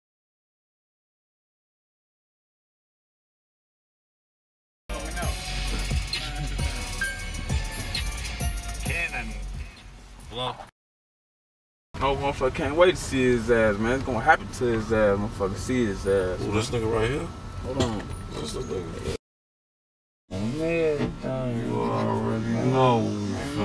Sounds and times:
Pop music: 0:04.9 - 0:09.8
Speech: 0:08.9 - 0:09.4, 0:12.0 - 0:19.0, 0:20.4 - 0:23.6.

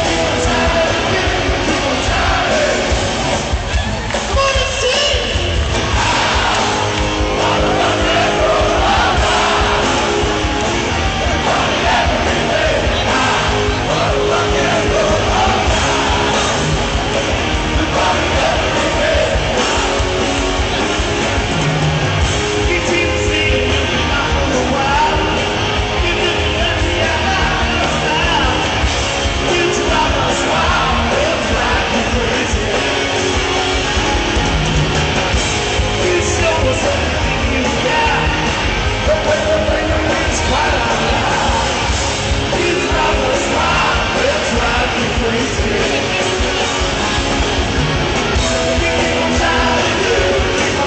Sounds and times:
Rock and roll: 0:00.0 - 0:50.8.

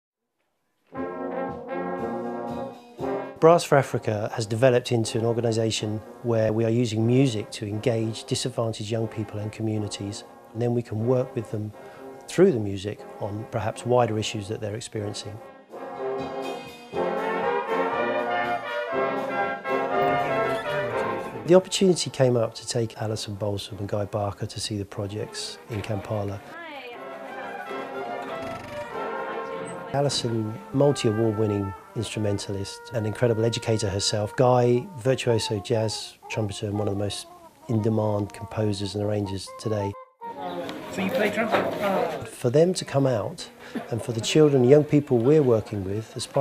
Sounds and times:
Brass instrument: 0:00.8 - 0:24.1, 0:25.0 - 0:36.8, 0:38.6 - 0:42.3
Speech: 0:03.4 - 0:11.7, 0:12.3 - 0:15.4, 0:20.1 - 0:27.0, 0:29.9 - 0:46.4.

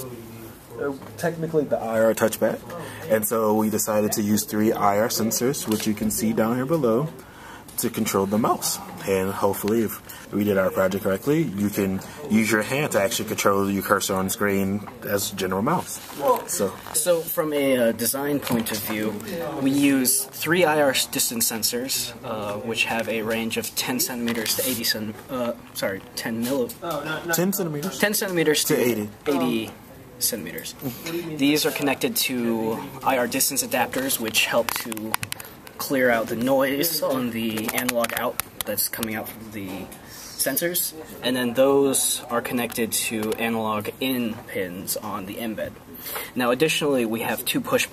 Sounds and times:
Speech: 0:00.0 - 0:07.2, 0:07.8 - 0:47.9.

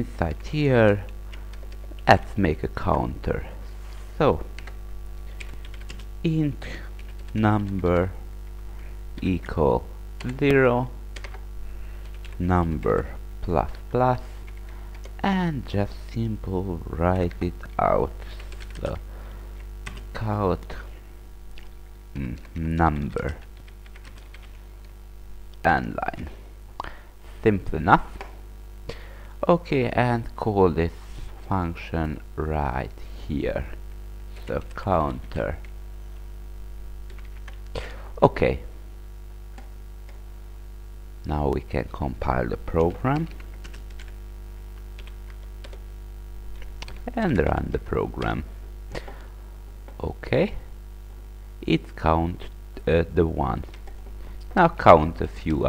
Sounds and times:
Speech: 0:00.0 - 0:01.1, 0:02.0 - 0:04.5, 0:06.2 - 0:08.2, 0:09.2 - 0:11.0, 0:12.4 - 0:14.4, 0:15.2 - 0:19.0, 0:20.1 - 0:20.9, 0:22.2 - 0:23.4, 0:25.6 - 0:26.4, 0:27.4 - 0:28.2, 0:29.4 - 0:33.8, 0:34.4 - 0:35.6, 0:38.1 - 0:38.7, 0:41.2 - 0:43.4, 0:47.0 - 0:48.5, 0:50.0 - 0:50.7, 0:51.6 - 0:53.7, 0:54.5 - 0:55.6.

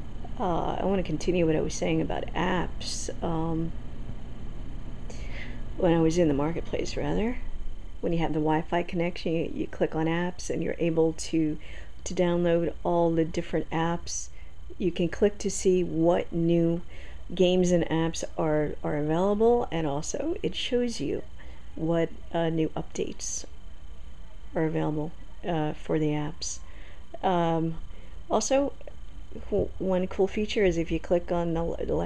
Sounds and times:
Speech: 0:00.4 - 0:03.7, 0:05.8 - 0:07.4, 0:08.0 - 0:23.5, 0:24.6 - 0:26.6, 0:27.2 - 0:32.0.

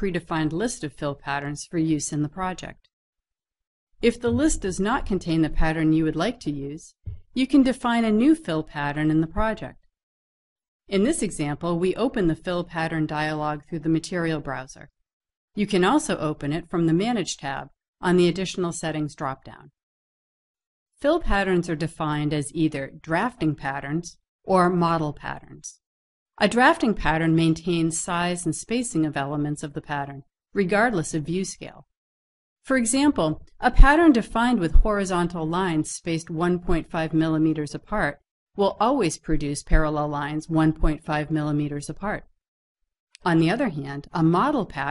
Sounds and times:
Speech: 0:00.0 - 0:02.8, 0:04.0 - 0:09.8, 0:10.9 - 0:14.9, 0:15.6 - 0:19.7, 0:21.0 - 0:25.8, 0:26.4 - 0:31.8, 0:32.7 - 0:42.3, 0:43.2 - 0:44.9.

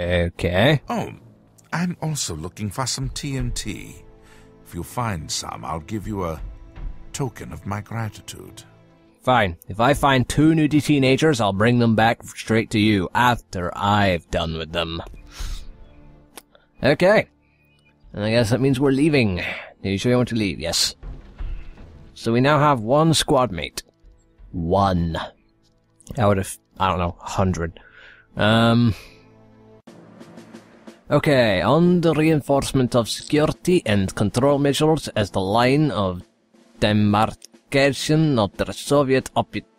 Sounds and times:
Speech synthesizer: 0:00.0 - 0:04.0, 0:04.7 - 0:06.4, 0:07.2 - 0:08.6, 0:09.3 - 0:15.1, 0:31.1 - 0:36.2, 0:36.8 - 0:39.6
Music: 0:00.0 - 0:39.7.

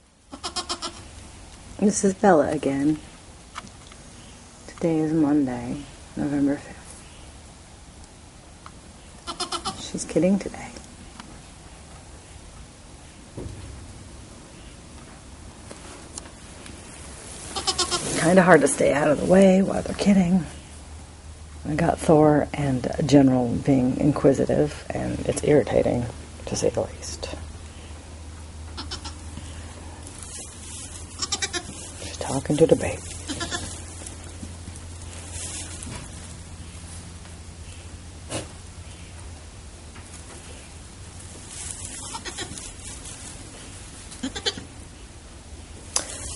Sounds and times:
Bleat: 0:00.3 - 0:01.1, 0:09.2 - 0:09.8, 0:17.6 - 0:18.1, 0:28.8 - 0:29.2, 0:31.2 - 0:31.7, 0:33.3 - 0:33.8, 0:42.0 - 0:42.6, 0:44.2 - 0:44.7
Speech: 0:01.8 - 0:03.0, 0:04.7 - 0:06.9, 0:09.8 - 0:10.8, 0:18.2 - 0:20.6, 0:21.6 - 0:27.5, 0:32.0 - 0:33.1.

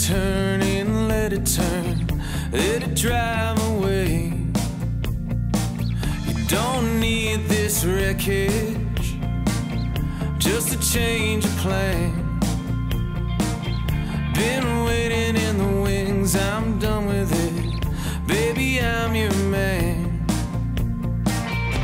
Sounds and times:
Blues: 0:00.0 - 0:21.8.

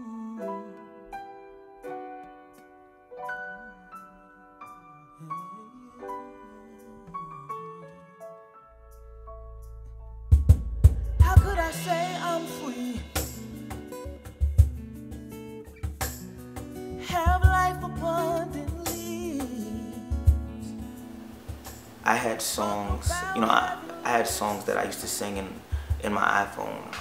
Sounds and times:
Music: 0:00.0 - 0:27.0.

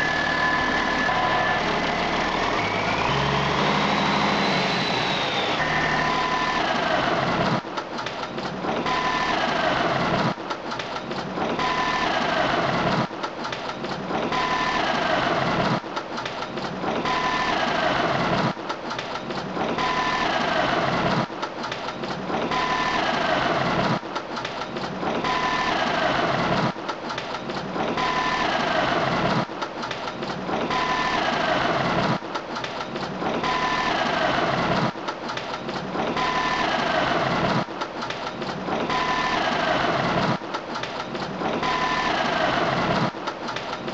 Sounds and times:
Idling: 0:00.0 - 0:43.9.

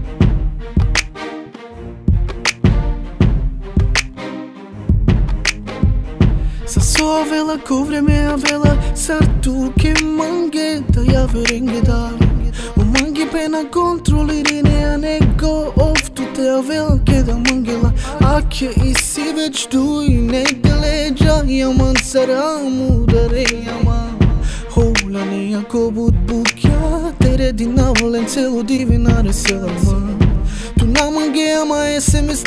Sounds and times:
Music: 0:00.0 - 0:32.4.

